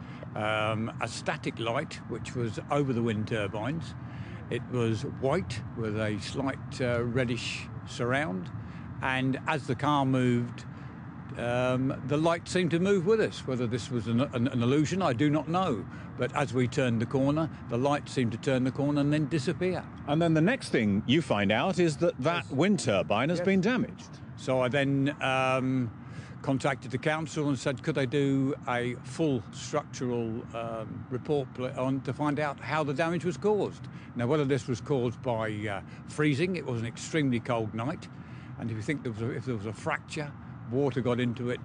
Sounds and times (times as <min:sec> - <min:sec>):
Speech: 0:00.2 - 0:10.7, 0:11.3 - 0:41.6.